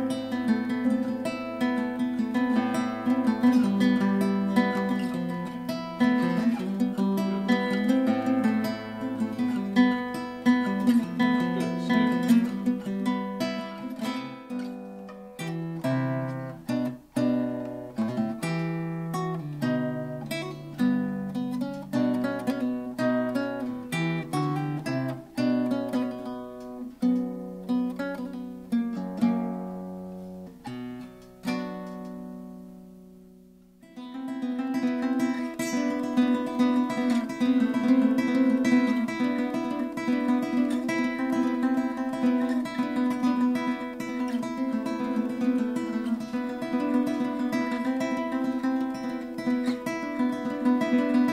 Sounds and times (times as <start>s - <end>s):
Acoustic guitar: 0.0s - 51.3s.